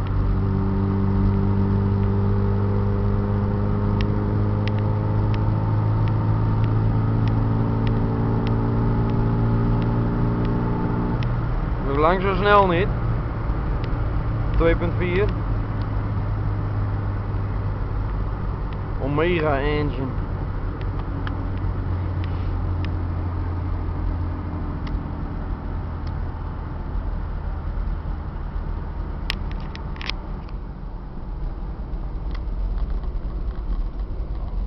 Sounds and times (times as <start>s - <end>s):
Car: 0.0s - 34.6s.